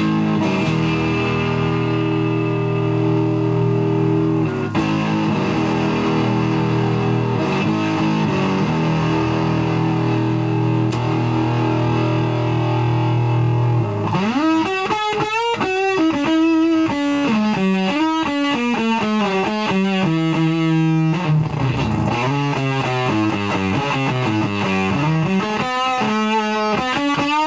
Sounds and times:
Harmonic: 0.0 - 27.4
Music: 0.0 - 27.4.

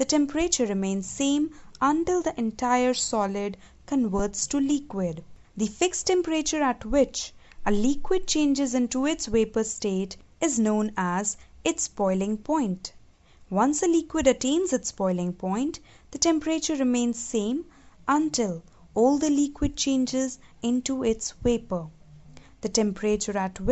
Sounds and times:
Speech: 0.0 - 21.9, 22.6 - 23.7.

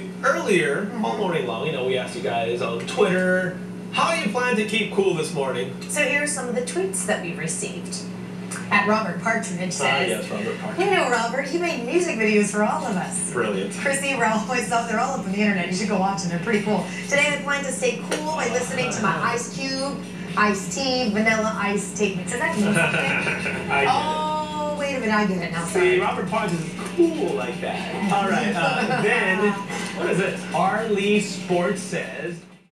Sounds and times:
Speech: 0.0 - 32.5.

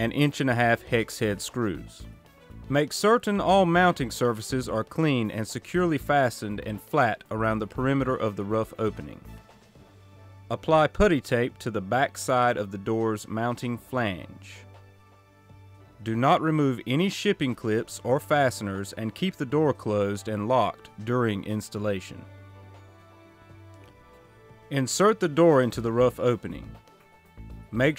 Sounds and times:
Speech: 0.0 - 2.0, 2.7 - 9.3, 10.5 - 14.6, 16.0 - 22.2, 24.7 - 26.8, 27.8 - 27.9
Music: 0.0 - 27.9.

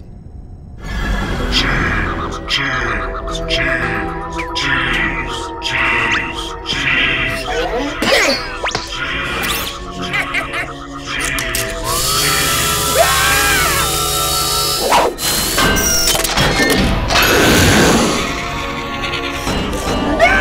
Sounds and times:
Music: 0.0 - 20.4
Speech: 1.5 - 11.6, 20.1 - 20.4.

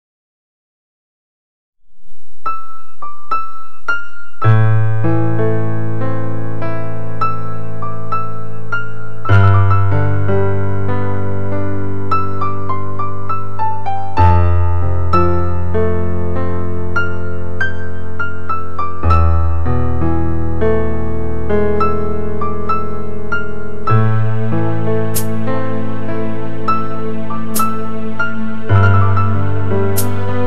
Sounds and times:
Electric piano: 2.4 - 30.4.

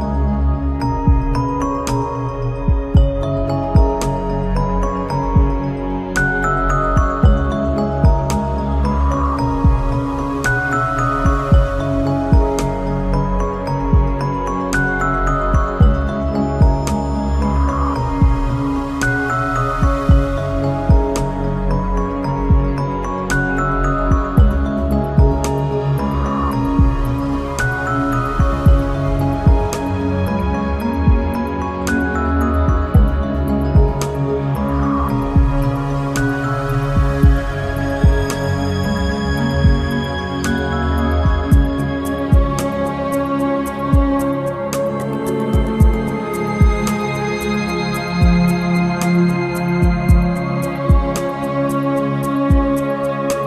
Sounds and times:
Background music: 0.0 - 53.4.

